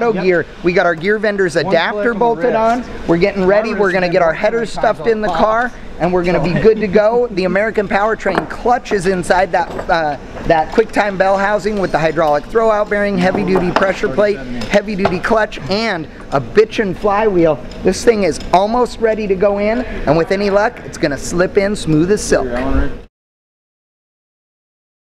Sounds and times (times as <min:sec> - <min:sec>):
Speech: 0:00.0 - 0:23.1.